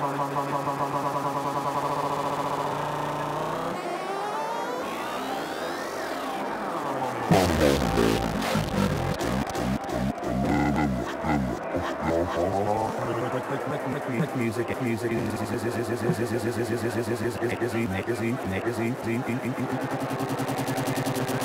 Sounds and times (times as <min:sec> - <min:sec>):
Synthesizer: 0:00.0 - 0:21.4.